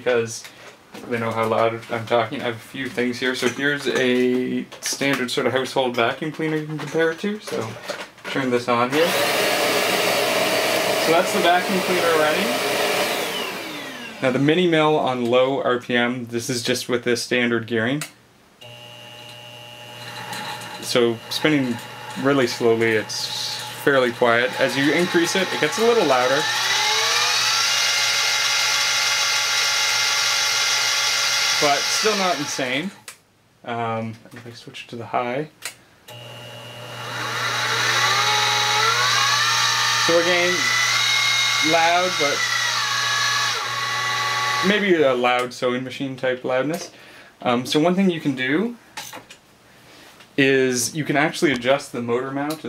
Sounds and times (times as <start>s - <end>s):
Speech: 0.0s - 9.2s, 11.0s - 12.6s, 14.2s - 18.2s, 20.8s - 26.5s, 31.6s - 33.0s, 33.6s - 35.6s, 40.0s - 40.8s, 41.6s - 42.4s, 44.6s - 48.8s, 50.4s - 52.6s.